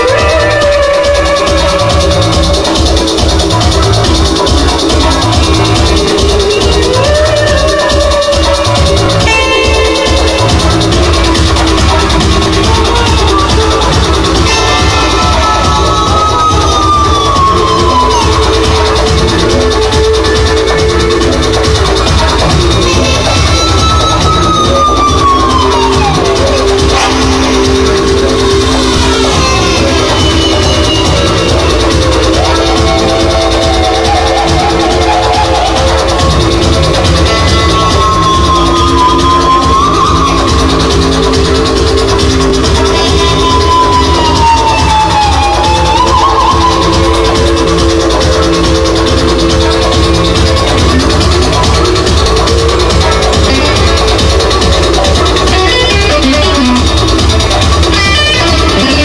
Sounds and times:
Bass guitar: 0.0 - 59.0
Electric guitar: 0.0 - 59.0
Electronic music: 0.0 - 59.0.

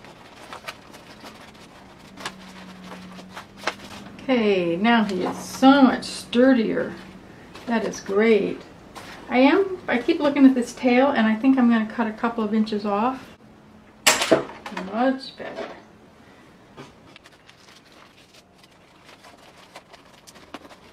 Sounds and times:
Speech: 4.2 - 7.0, 7.7 - 8.7, 9.3 - 13.3, 14.7 - 15.8.

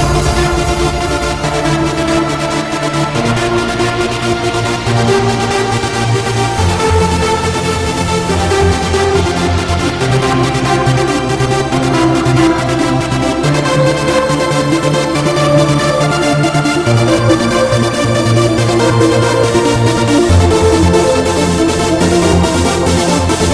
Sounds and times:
Techno: 0.0 - 23.5
Trance music: 0.0 - 23.5.

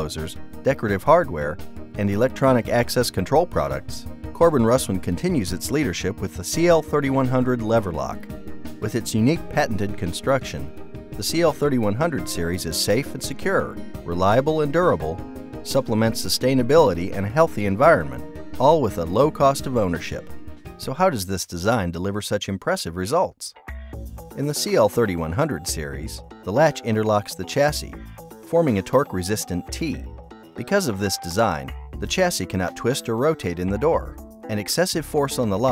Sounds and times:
Music: 0.0 - 21.4, 23.5 - 35.7
Speech: 0.0 - 23.6, 24.4 - 35.7.

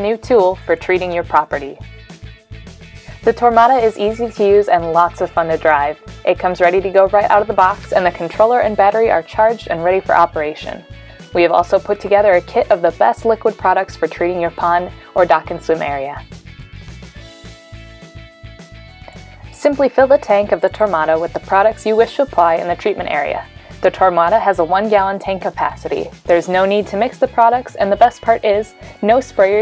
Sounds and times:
Speech: 0.0 - 1.8, 3.3 - 10.8, 11.4 - 16.2, 19.6 - 29.6
Music: 0.0 - 29.6.

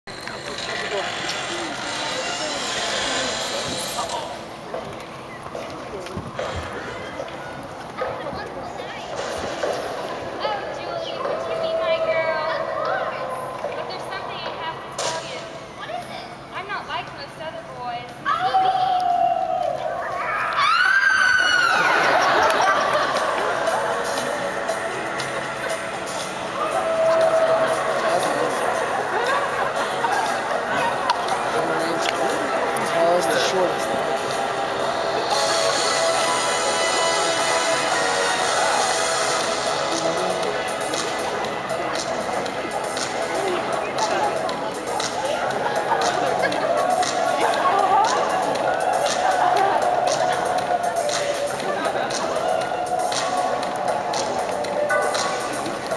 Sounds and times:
Speech: 0.4 - 20.4, 27.2 - 34.3, 39.8 - 55.9.

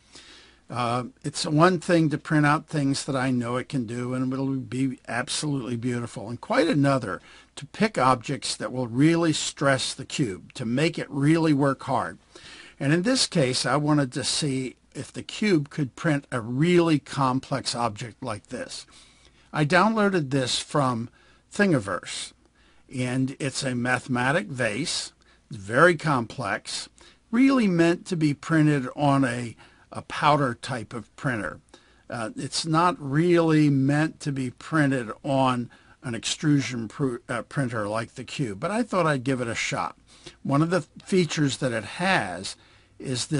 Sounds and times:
Speech: 0.7 - 12.2, 12.8 - 18.9, 19.5 - 43.4.

